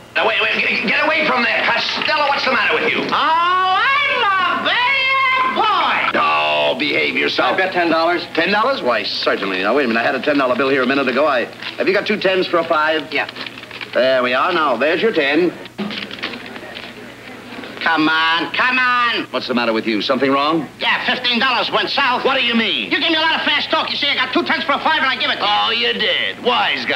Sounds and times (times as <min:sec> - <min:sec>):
Speech: 0:00.2 - 0:13.3, 0:16.6 - 0:26.9.